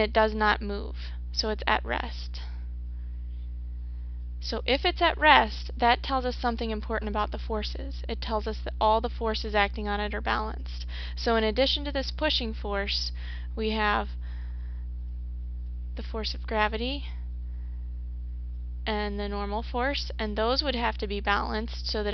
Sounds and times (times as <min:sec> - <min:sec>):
Speech: 0:00.0 - 0:02.5, 0:04.4 - 0:14.1, 0:16.0 - 0:17.2, 0:18.9 - 0:22.1.